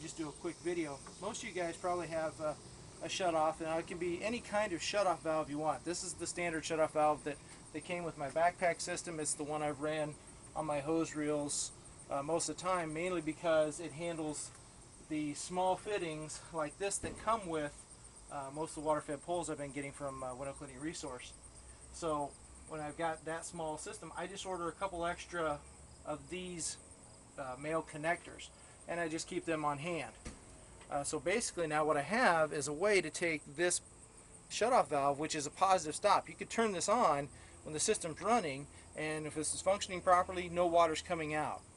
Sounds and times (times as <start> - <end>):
Speech: 0.0 - 14.5, 15.1 - 21.3, 22.0 - 26.8, 27.4 - 30.2, 30.9 - 33.8, 34.5 - 41.6.